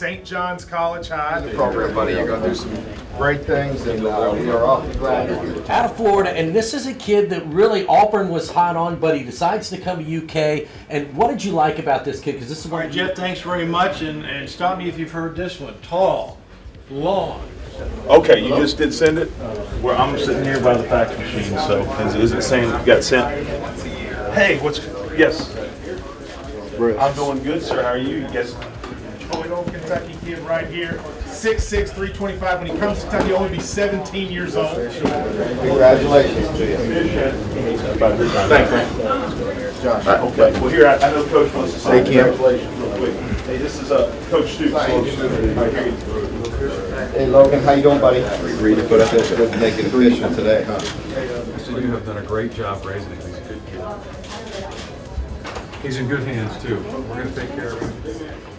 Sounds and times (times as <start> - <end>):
Speech: 0.0 - 58.5.